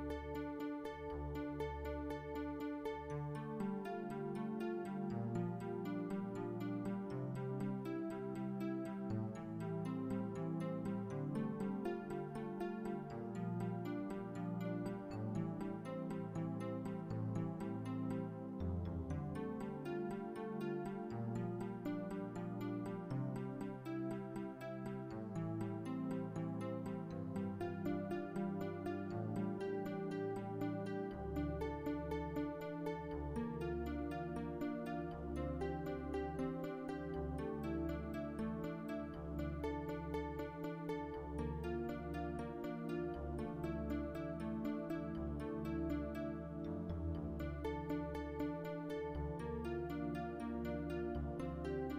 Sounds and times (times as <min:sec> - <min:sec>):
Music: 0:00.0 - 0:51.9.